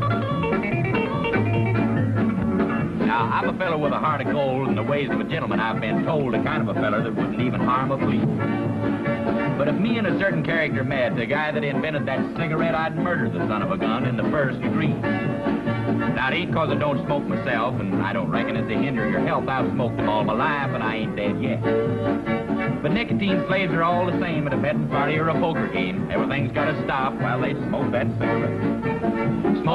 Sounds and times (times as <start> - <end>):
Music: 0.0 - 29.7
Speech: 3.0 - 8.3, 9.6 - 15.0, 16.2 - 21.7, 22.8 - 28.4.